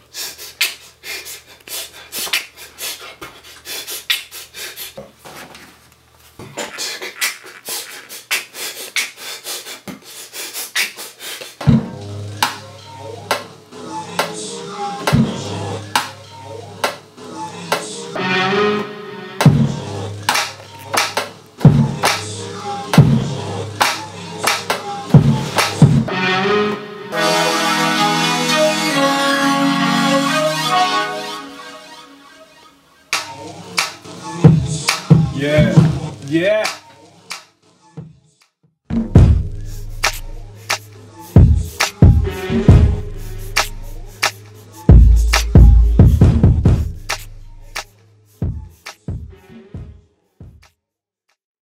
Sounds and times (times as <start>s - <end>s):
Music: 10.6s - 50.9s.